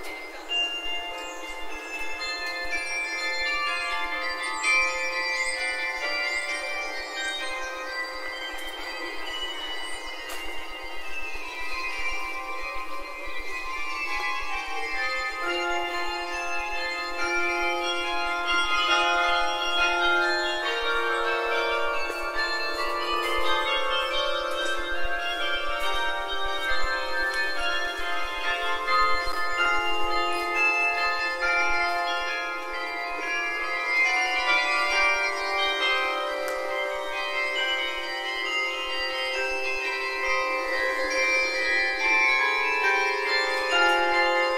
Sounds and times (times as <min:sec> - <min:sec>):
Music: 0:00.0 - 0:44.5.